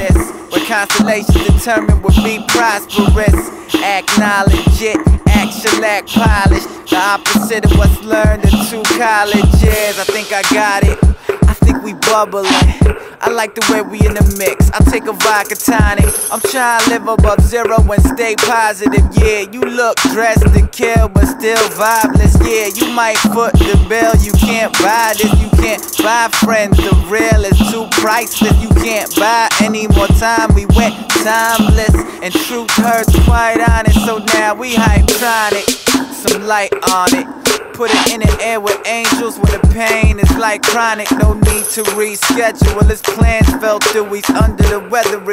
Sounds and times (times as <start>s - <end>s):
Music: 0.0s - 45.3s.